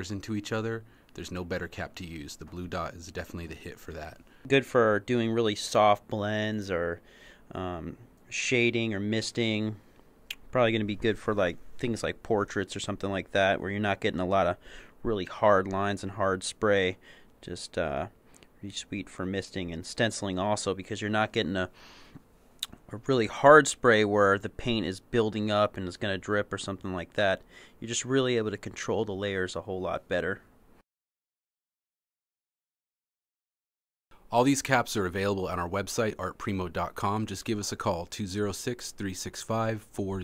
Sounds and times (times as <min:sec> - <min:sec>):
Speech: 0:00.0 - 0:21.8, 0:22.6 - 0:30.5, 0:34.3 - 0:40.2.